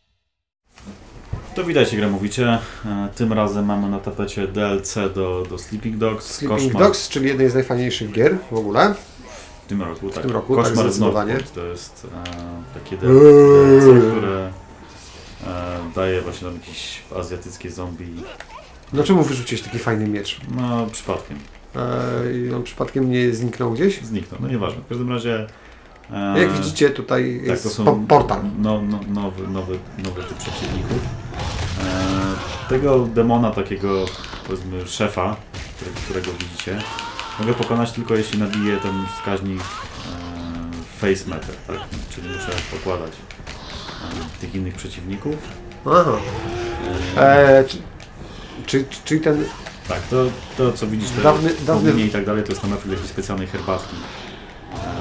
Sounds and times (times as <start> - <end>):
Speech: 1.5 - 14.6, 15.4 - 25.5, 26.1 - 31.1, 31.8 - 43.2, 44.2 - 47.9, 48.6 - 54.0.